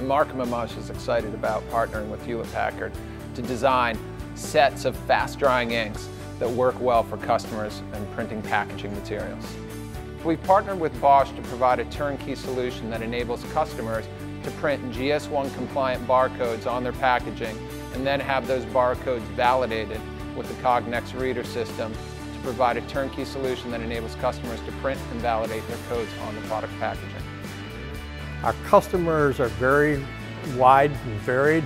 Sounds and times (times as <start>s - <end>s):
Speech: 0.0s - 9.6s, 10.2s - 27.2s, 28.4s - 31.6s
Music: 0.0s - 31.6s.